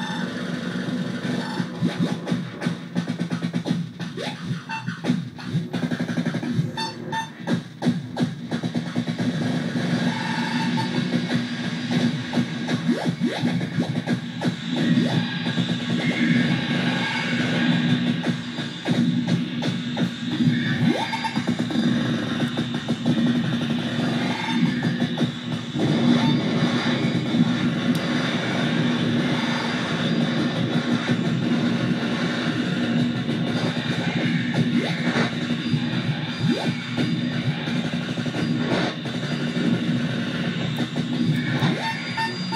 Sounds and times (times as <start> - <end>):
Drum: 0.0 - 42.5
Synthesizer: 0.0 - 42.5.